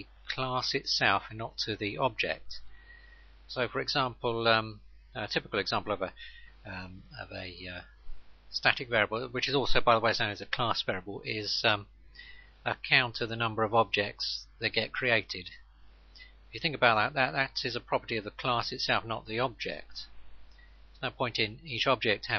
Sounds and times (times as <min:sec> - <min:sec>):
Speech: 0:00.0 - 0:02.6, 0:03.5 - 0:07.9, 0:08.6 - 0:11.9, 0:12.7 - 0:15.6, 0:16.6 - 0:20.1, 0:21.0 - 0:22.3.